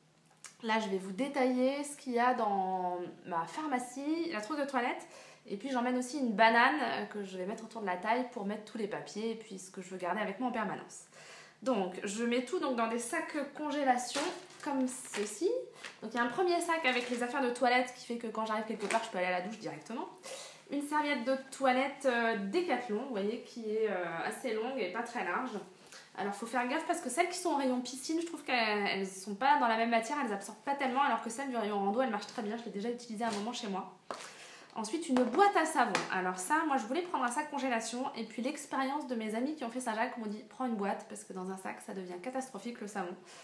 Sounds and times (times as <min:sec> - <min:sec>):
Speech: 0:00.5 - 0:34.0, 0:34.8 - 0:43.2.